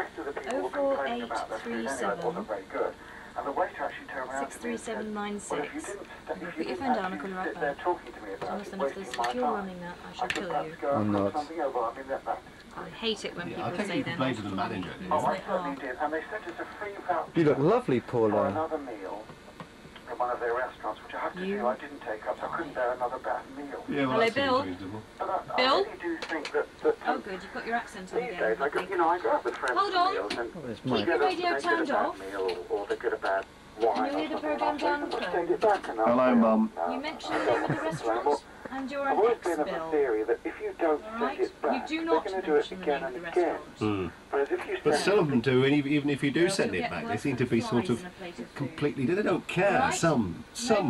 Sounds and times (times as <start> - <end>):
Speech: 0.0 - 2.7, 3.4 - 19.2, 20.1 - 50.8
Radio: 0.0 - 19.4, 20.0 - 50.8.